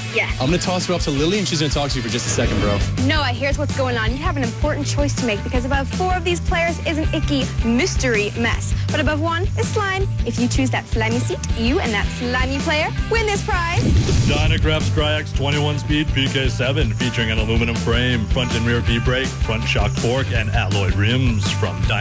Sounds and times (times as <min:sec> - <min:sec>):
Music: 0:00.0 - 0:22.0
Speech: 0:00.2 - 0:22.0.